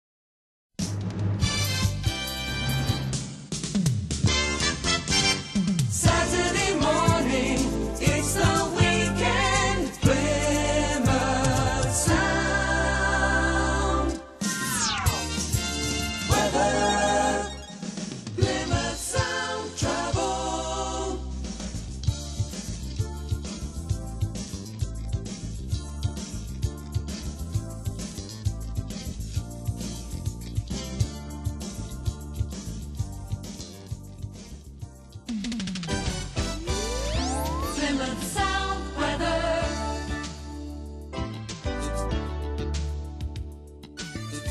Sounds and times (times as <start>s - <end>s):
Jingle (music): 1.0s - 44.5s.